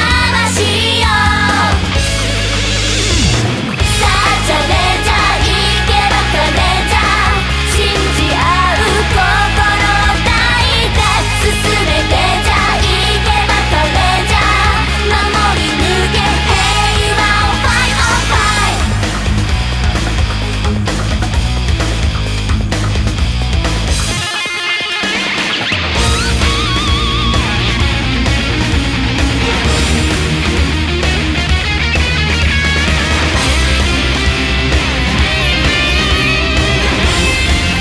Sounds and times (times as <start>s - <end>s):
Heavy metal: 0.0s - 37.8s.